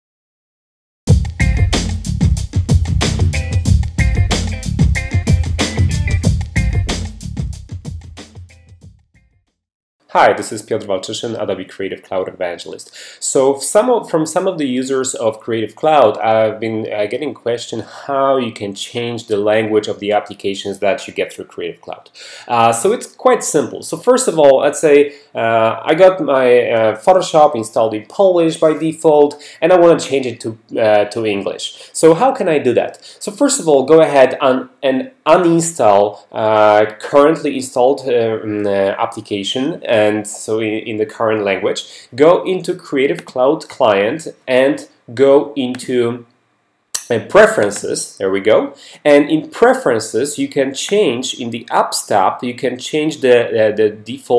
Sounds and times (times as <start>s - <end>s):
Drum machine: 1.1s - 9.0s.